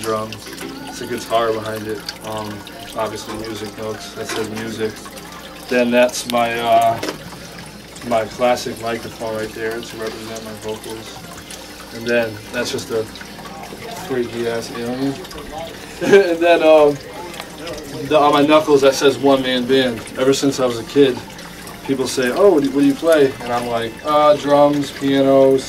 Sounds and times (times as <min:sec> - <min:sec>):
Speech: 0:00.0 - 0:05.0, 0:05.7 - 0:07.0, 0:08.0 - 0:11.3, 0:11.9 - 0:21.2, 0:21.9 - 0:25.6
Music: 0:00.0 - 0:25.6
Pour: 0:00.0 - 0:25.6.